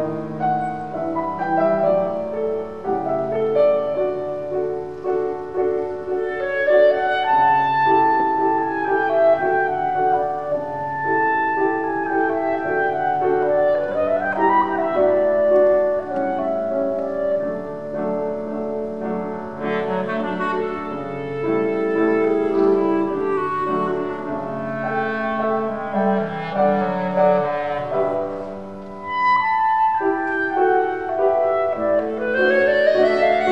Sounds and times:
Clarinet: 0.0 - 33.5
Classical music: 0.0 - 33.5.

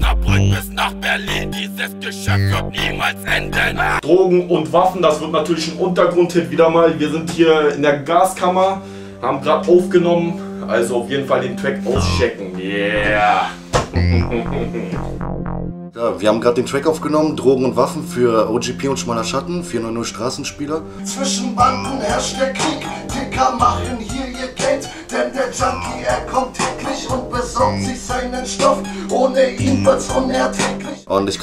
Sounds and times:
Speech: 0.0 - 13.6, 16.0 - 21.2, 31.1 - 31.4
Music: 0.0 - 31.4.

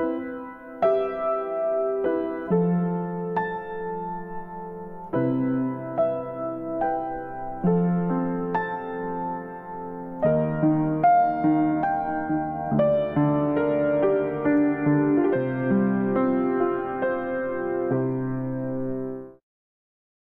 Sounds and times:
Music: 0.0 - 19.4.

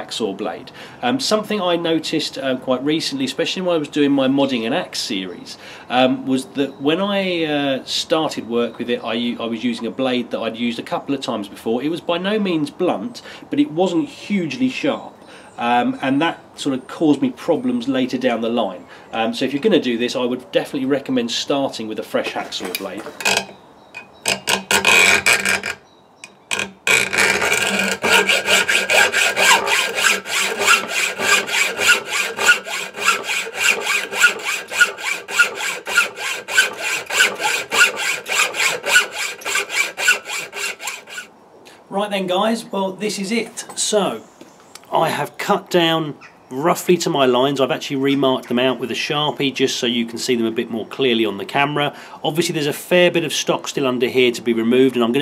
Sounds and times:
Speech: 0.0 - 23.1, 41.9 - 44.2, 44.9 - 55.2.

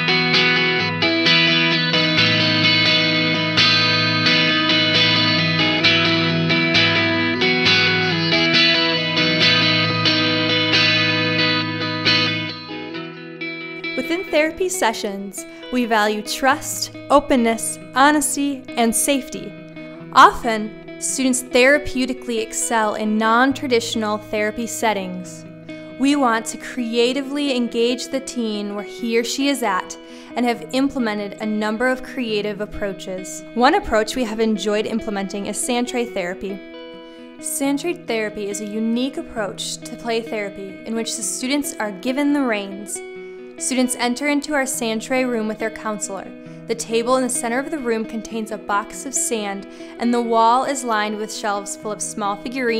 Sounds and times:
Music: 0.0 - 52.7
Speech: 14.0 - 19.5, 20.2 - 25.4, 26.0 - 36.6, 37.4 - 43.0, 43.6 - 52.7.

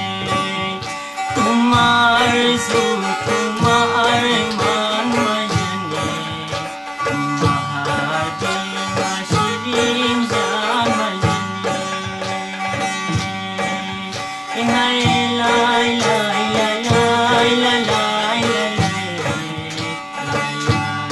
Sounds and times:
Middle Eastern music: 0.0 - 21.1.

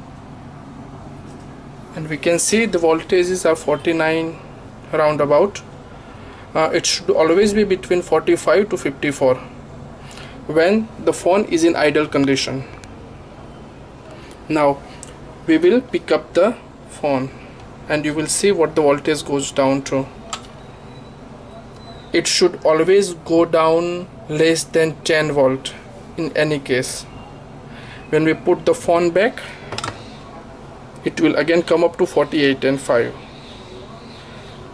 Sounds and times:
Speech: 1.9 - 5.7, 6.6 - 9.6, 10.5 - 12.8, 14.5 - 14.8, 15.4 - 20.5, 21.5 - 27.1, 28.1 - 29.6, 30.3 - 34.4.

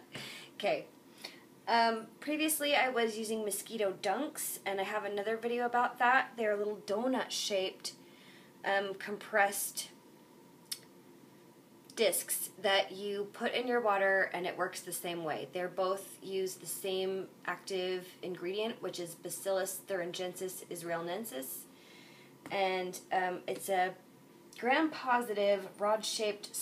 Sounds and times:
Speech: 0.6 - 0.9, 1.7 - 8.0, 8.7 - 10.0, 11.9 - 21.7, 22.5 - 24.0, 24.6 - 26.6.

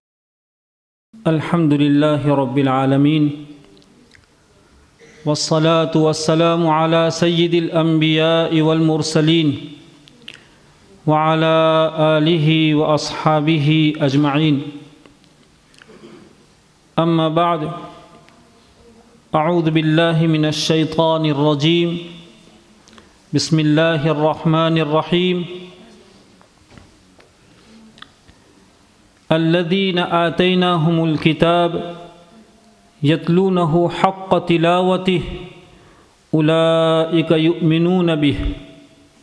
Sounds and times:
Male speech, man speaking: 1.2 - 3.7, 5.0 - 9.8, 11.0 - 15.0, 17.0 - 18.2, 19.3 - 22.5, 23.3 - 26.0, 29.3 - 32.2, 33.0 - 35.7, 36.3 - 38.9
Narration, monologue: 1.2 - 26.6, 27.4 - 39.2.

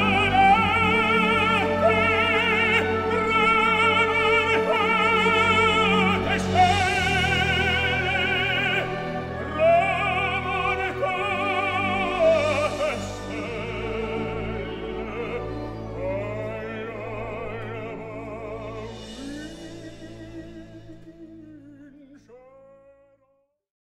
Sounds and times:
Music: 0.0 - 23.7.

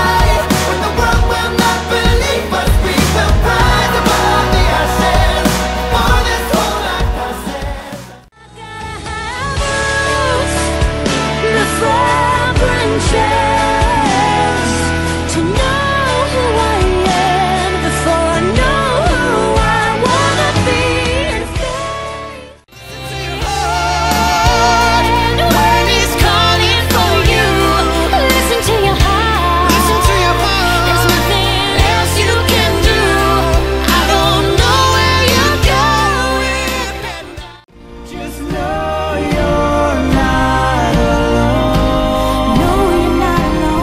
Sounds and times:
Music: 0.0 - 43.8.

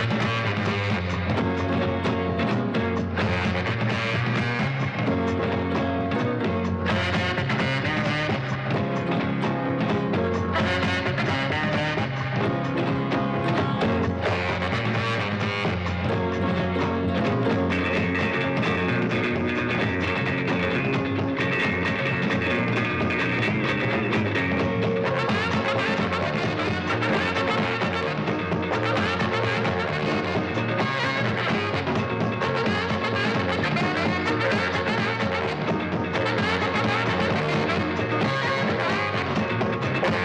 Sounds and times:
Music: 0.0 - 40.2.

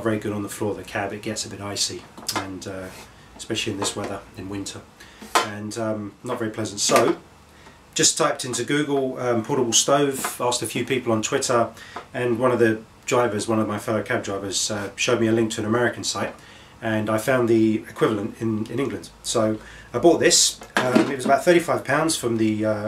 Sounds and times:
Speech: 0.0 - 7.2, 8.0 - 22.8.

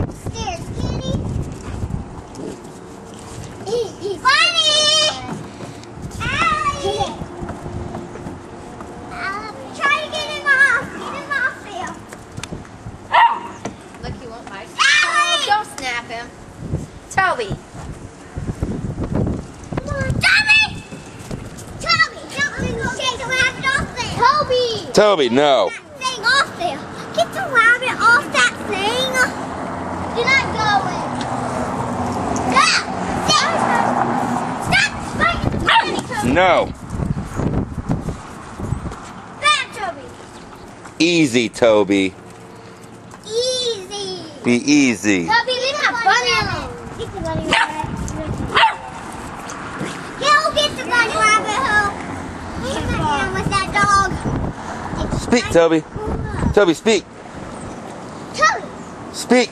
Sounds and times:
Outside, urban or manmade: 0.0 - 59.5
Canidae, dogs, wolves: 13.1 - 13.6, 35.6 - 36.1, 47.5 - 47.9, 48.5 - 49.1
Dog: 13.1 - 13.6, 35.6 - 36.1, 47.5 - 47.9, 48.5 - 49.0.

